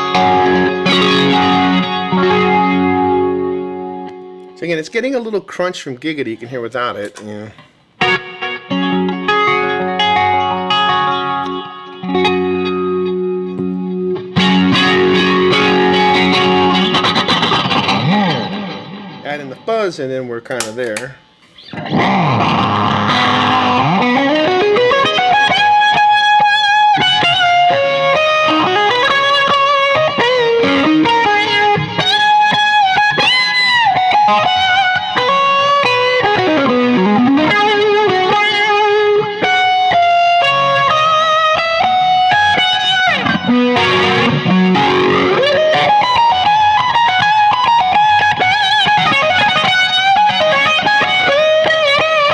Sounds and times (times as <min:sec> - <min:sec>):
Bass guitar: 0:00.0 - 0:04.6, 0:07.1 - 0:19.6, 0:20.6 - 0:52.3
Speech: 0:04.6 - 0:07.6, 0:19.2 - 0:21.2.